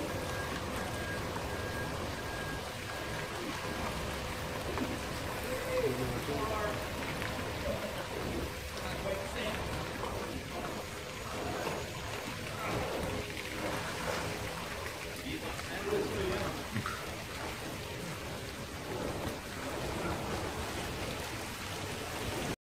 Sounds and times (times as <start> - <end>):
Rain on surface: 0.0 - 22.6
Speech: 5.4 - 6.8, 8.8 - 9.7, 15.2 - 16.8.